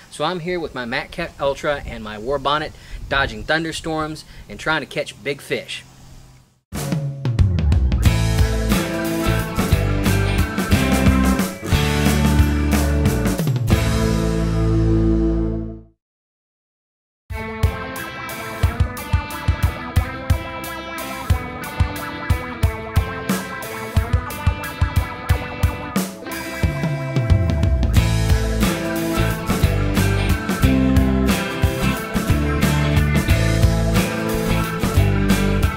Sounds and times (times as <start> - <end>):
Music: 6.7 - 16.0, 17.3 - 35.7.